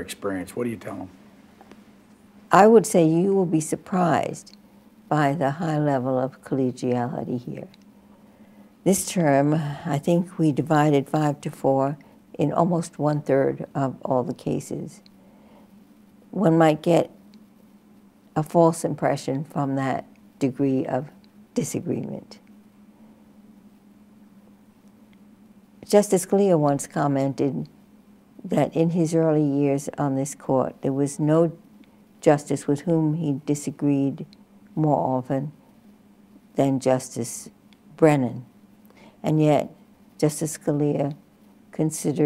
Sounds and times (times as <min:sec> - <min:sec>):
Speech: 0:00.0 - 0:01.2, 0:02.5 - 0:04.5, 0:08.9 - 0:15.0, 0:28.5 - 0:31.6, 0:39.3 - 0:41.2, 0:41.8 - 0:42.2.